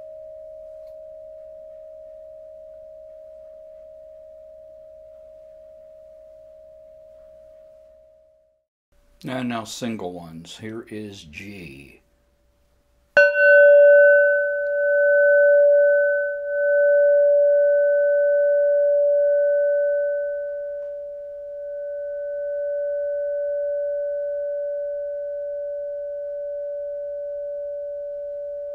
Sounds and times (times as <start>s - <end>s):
Bell: 0.0s - 8.4s, 13.2s - 28.7s
Speech: 9.2s - 12.0s.